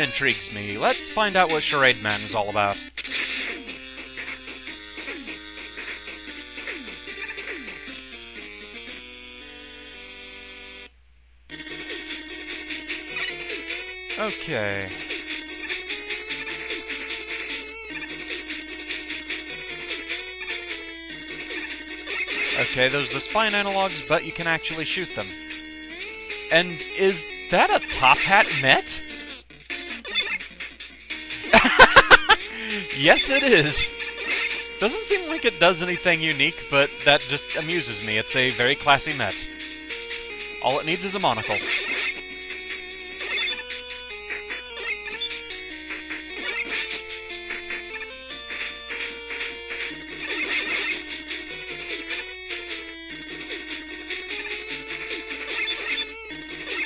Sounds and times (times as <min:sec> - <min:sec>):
Music: 0:00.0 - 0:10.9, 0:11.5 - 0:56.8.